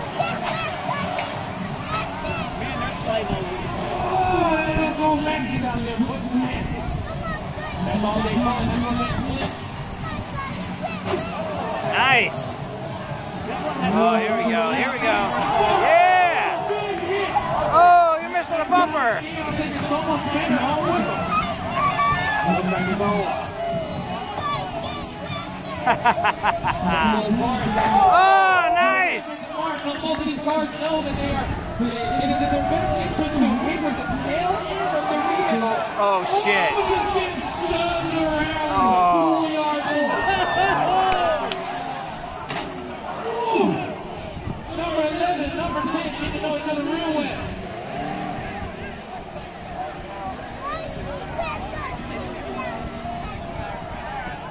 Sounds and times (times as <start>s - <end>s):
Outside, rural or natural: 0.0s - 54.5s.